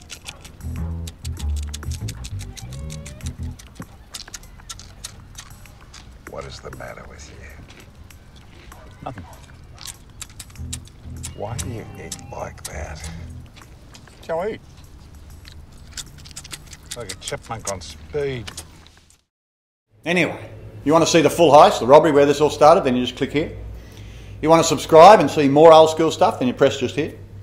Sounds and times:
Speech: 0:06.3 - 0:07.6, 0:11.3 - 0:13.2, 0:24.4 - 0:27.2.

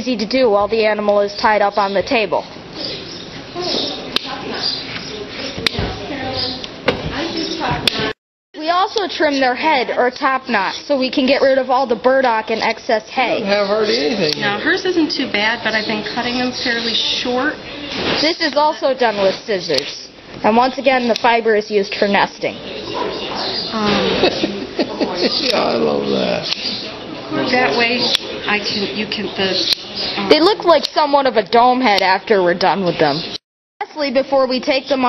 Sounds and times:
Speech: 0:12.3 - 0:14.9.

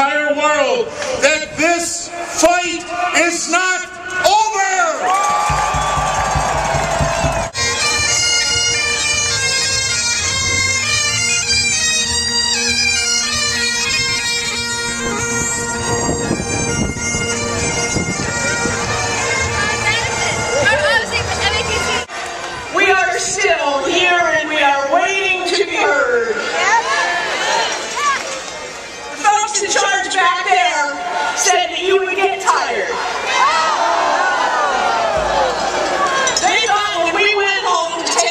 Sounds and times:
Crowd: 0:00.0 - 0:38.3
Bagpipes: 0:05.5 - 0:22.1
Wind instrument, woodwind instrument: 0:05.6 - 0:22.7.

